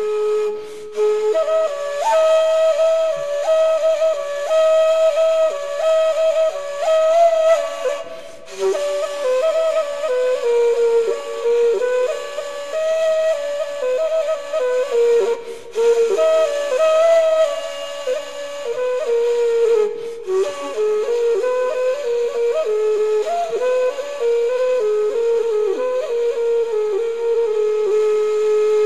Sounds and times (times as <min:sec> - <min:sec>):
Flute: 0:00.0 - 0:28.8.